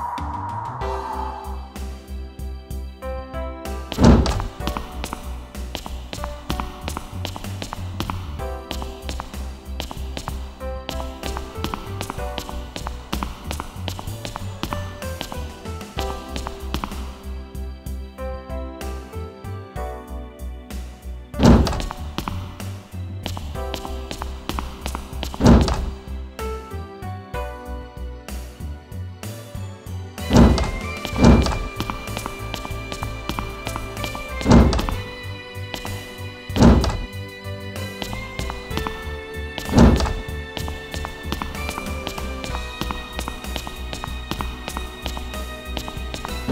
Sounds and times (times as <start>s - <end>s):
Music: 0.0s - 46.5s.